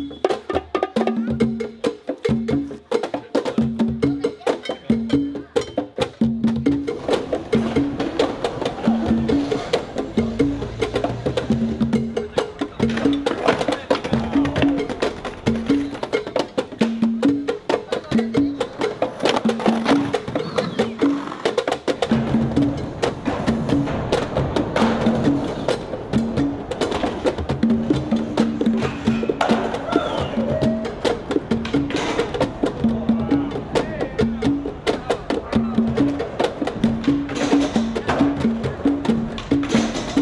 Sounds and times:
Music: 0.0s - 40.2s
Skateboard: 6.9s - 11.5s, 12.8s - 16.6s, 18.6s - 32.6s, 35.8s - 40.2s.

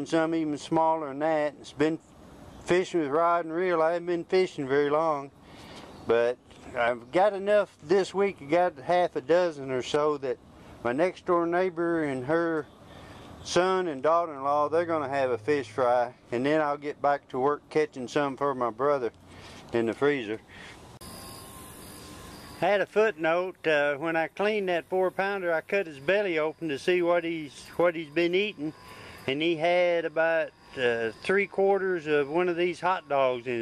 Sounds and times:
Speech: 0.0s - 2.0s, 2.7s - 5.3s, 6.1s - 12.7s, 13.4s - 20.4s, 22.6s - 33.6s.

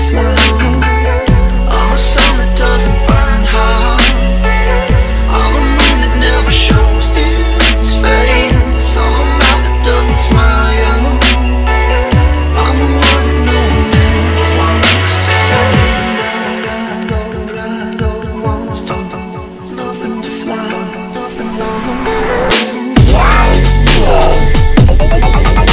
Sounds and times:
Dubstep: 0.0s - 25.7s.

